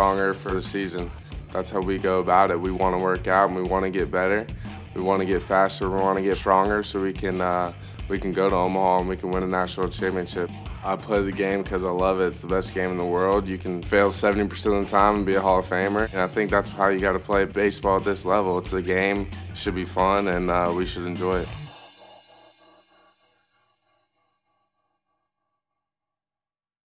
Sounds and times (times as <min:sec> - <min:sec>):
Speech: 0:00.0 - 0:21.5
Music: 0:00.0 - 0:25.0.